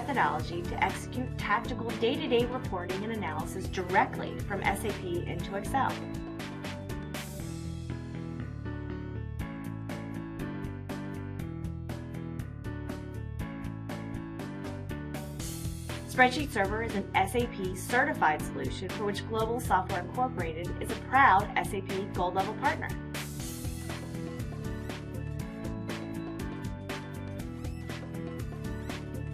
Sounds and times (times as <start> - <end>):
Speech: 0.0 - 6.0, 16.1 - 23.0
Music: 0.0 - 29.3.